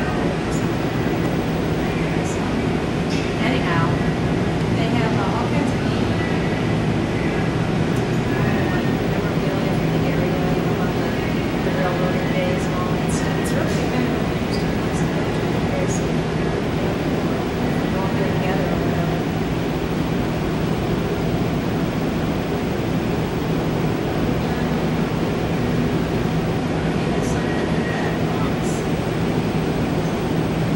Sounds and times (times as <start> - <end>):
Speech: 3.3 - 4.1, 4.7 - 6.6, 8.3 - 16.1, 17.6 - 19.3.